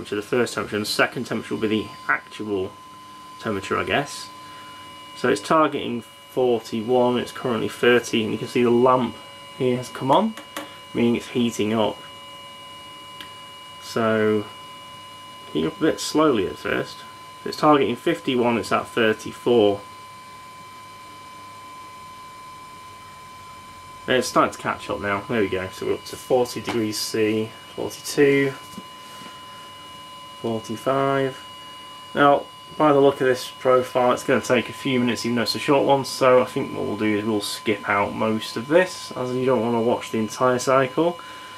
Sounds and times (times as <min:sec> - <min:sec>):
Speech: 0:00.0 - 0:02.8, 0:03.4 - 0:04.4, 0:05.2 - 0:10.4, 0:11.0 - 0:12.0, 0:13.8 - 0:14.6, 0:15.5 - 0:19.9, 0:24.1 - 0:28.7, 0:30.4 - 0:31.4, 0:32.2 - 0:41.2.